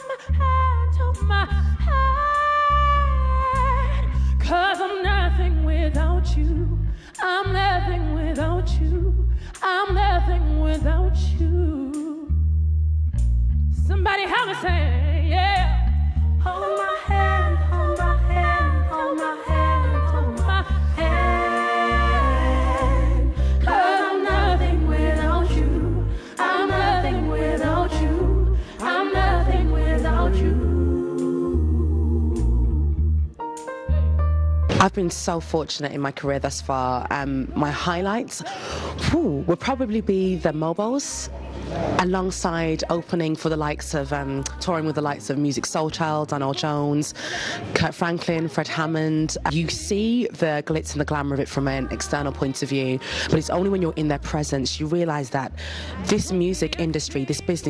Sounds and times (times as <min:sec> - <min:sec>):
Pop music: 0:16.5 - 0:31.7, 0:55.8 - 0:57.6
Singing: 0:16.5 - 0:32.5.